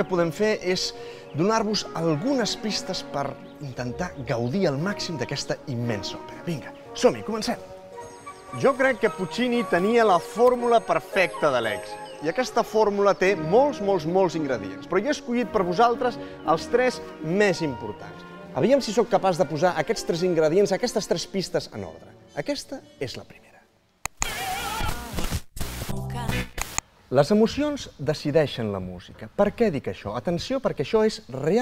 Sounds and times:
Speech: 0.0 - 7.6, 8.6 - 23.6, 27.1 - 31.6
Music: 0.0 - 26.8.

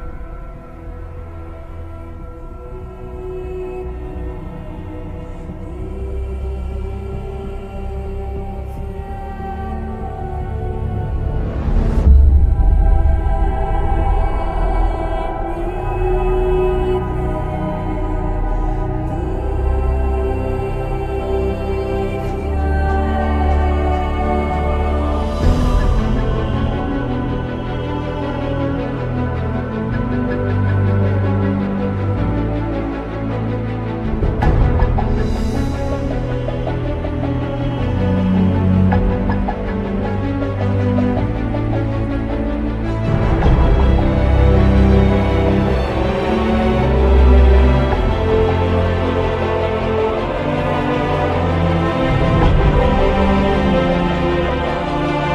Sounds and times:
Soundtrack music: 0.0 - 55.3.

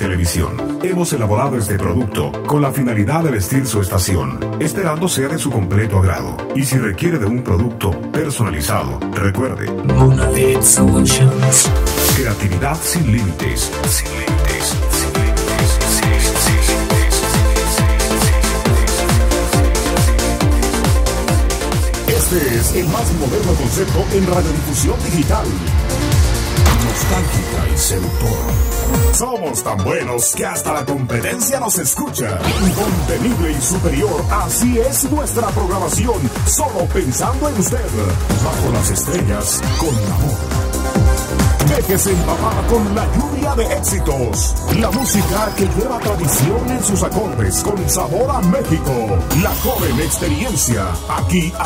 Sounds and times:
Speech: 0.0 - 19.2, 22.0 - 25.7, 26.7 - 40.5, 41.6 - 51.6
Music: 0.0 - 51.6.

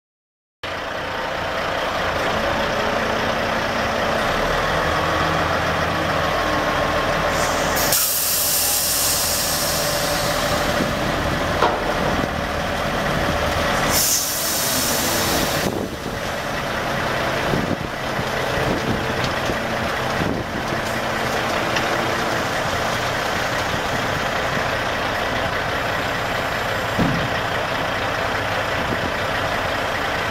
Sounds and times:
Hiss: 7.3 - 11.0, 13.8 - 15.8.

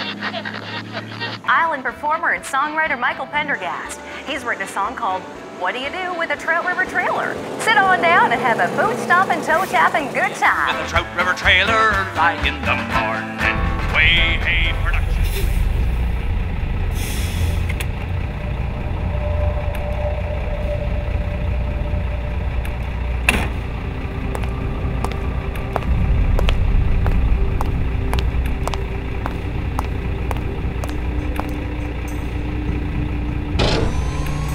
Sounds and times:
Music: 1.4 - 15.9, 18.5 - 34.5.

